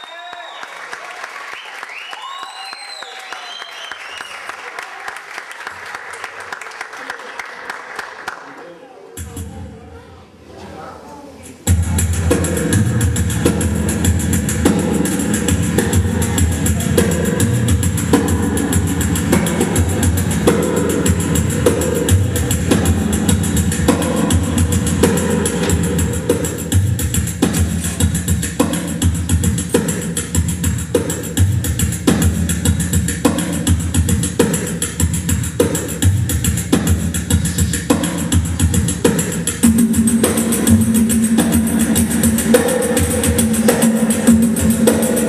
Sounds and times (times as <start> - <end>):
Music: 9.2 - 10.0, 11.5 - 45.2.